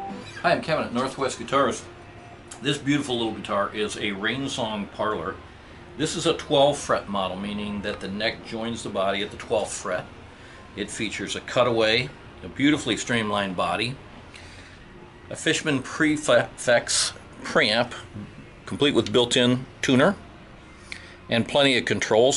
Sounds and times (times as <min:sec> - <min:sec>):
Speech: 0:00.4 - 0:01.9, 0:02.6 - 0:05.4, 0:06.0 - 0:10.1, 0:10.7 - 0:14.0, 0:15.3 - 0:20.2, 0:21.3 - 0:22.3.